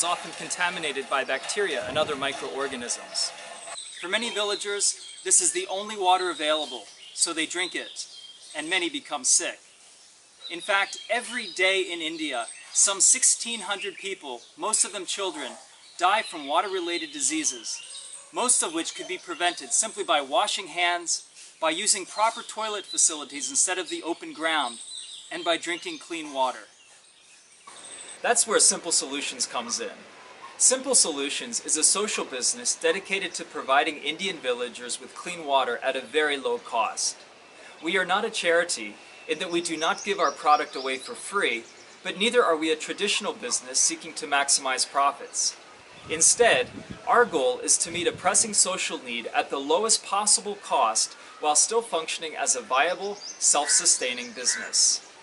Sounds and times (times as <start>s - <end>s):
Speech: 0.0s - 3.3s, 4.0s - 9.6s, 10.5s - 17.8s, 18.4s - 26.7s, 28.2s - 30.0s, 30.6s - 37.2s, 37.8s - 55.0s.